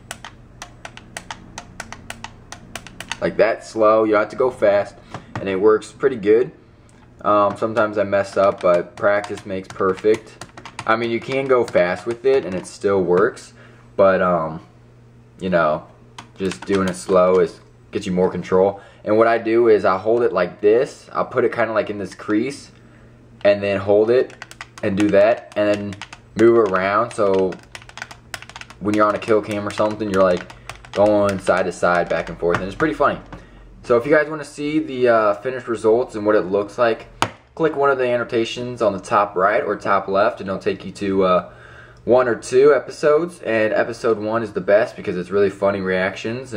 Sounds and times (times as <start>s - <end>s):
Speech: 3.2s - 6.6s, 7.2s - 14.7s, 15.4s - 22.8s, 23.4s - 27.6s, 28.8s - 41.5s, 42.1s - 46.5s.